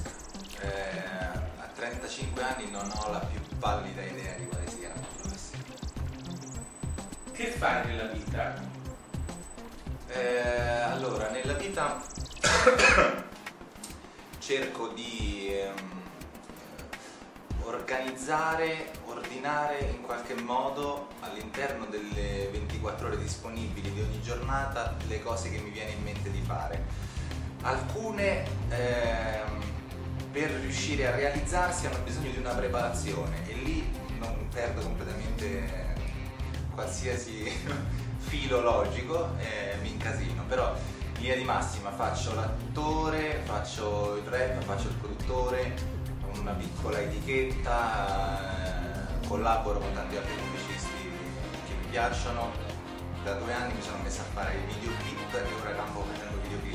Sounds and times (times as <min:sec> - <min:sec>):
Music: 0:00.0 - 0:56.7
Speech: 0:00.5 - 0:05.6, 0:07.4 - 0:08.7, 0:10.1 - 0:13.3, 0:14.4 - 0:16.0, 0:17.6 - 0:26.8, 0:27.6 - 0:29.7, 0:30.3 - 0:56.7.